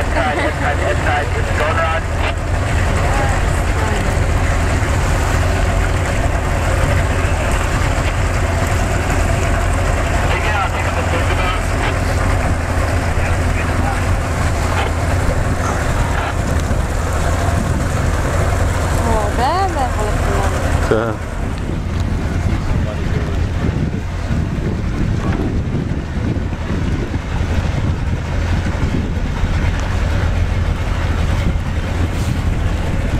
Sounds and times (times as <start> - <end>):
Wind noise (microphone): 0.0 - 19.8, 20.6 - 33.1
Sailboat, sailing ship: 0.0 - 33.1
Waves, surf: 0.0 - 33.1.